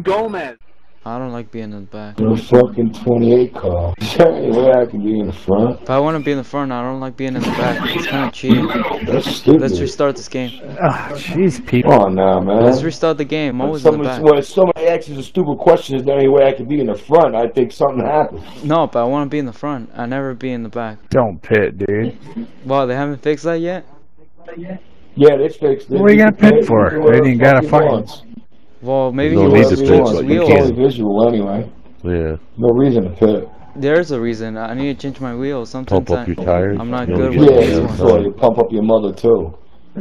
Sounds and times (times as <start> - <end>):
Speech: 0.0 - 23.8, 24.5 - 40.0.